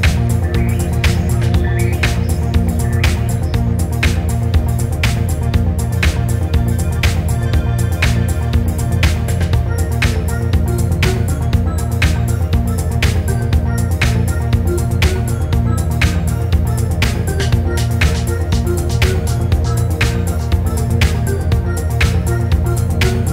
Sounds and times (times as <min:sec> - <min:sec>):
Background music: 0:00.0 - 0:23.3
Rhythm and blues: 0:00.0 - 0:23.3.